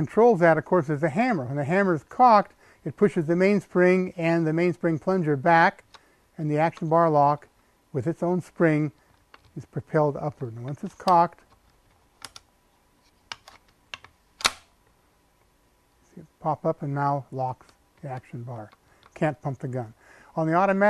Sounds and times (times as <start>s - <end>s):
Speech: 0.0s - 5.8s, 6.4s - 7.4s, 8.0s - 9.0s, 9.6s - 11.4s, 16.2s - 20.8s.